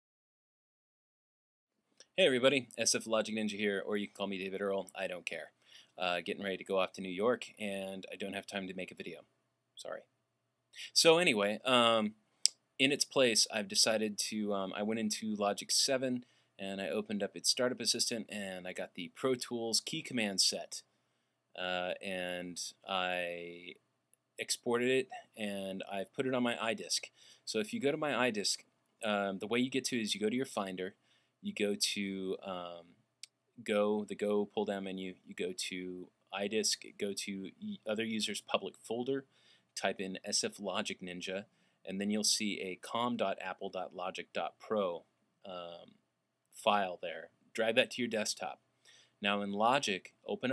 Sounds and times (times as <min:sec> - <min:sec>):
Speech: 0:02.2 - 0:10.1, 0:10.8 - 0:12.2, 0:12.8 - 0:20.9, 0:21.6 - 0:23.8, 0:24.4 - 0:32.9, 0:33.6 - 0:45.9, 0:46.6 - 0:48.6, 0:49.2 - 0:50.5.